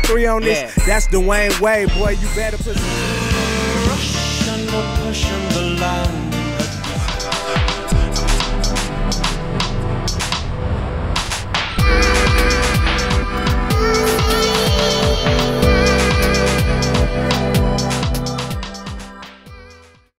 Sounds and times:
Background music: 0.0s - 20.1s
Soundtrack music: 0.0s - 20.1s.

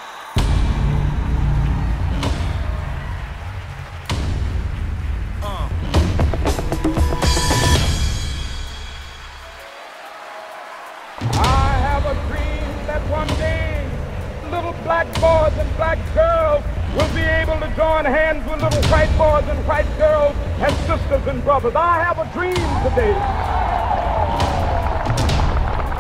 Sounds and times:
Music: 0.0s - 26.0s
Speech: 11.3s - 23.2s.

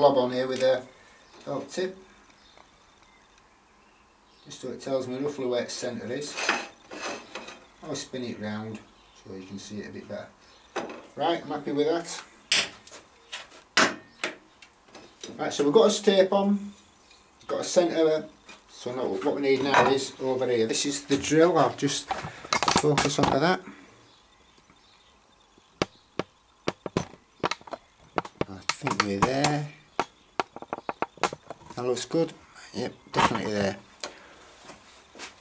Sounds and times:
Speech: 0.0s - 2.0s, 4.5s - 6.4s, 7.8s - 10.4s, 11.2s - 12.3s, 15.3s - 16.8s, 17.5s - 22.1s, 22.8s - 23.7s, 28.4s - 29.8s, 31.8s - 33.9s.

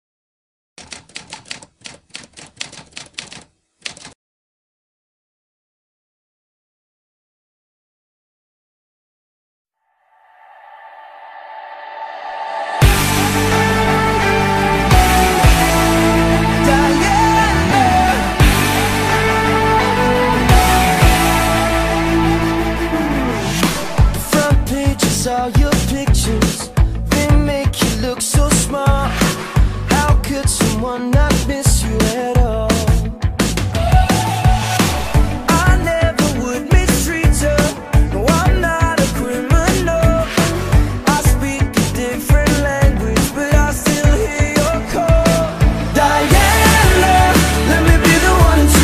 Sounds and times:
Typewriter: 0.8s - 4.2s.

